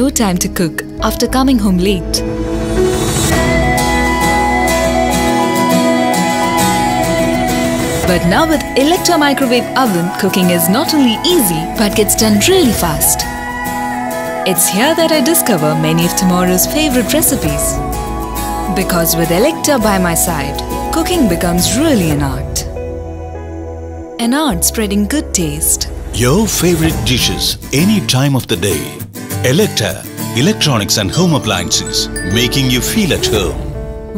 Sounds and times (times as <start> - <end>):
Speech: 0.0 - 2.2, 8.1 - 13.2, 24.2 - 33.7
Music: 0.0 - 34.1.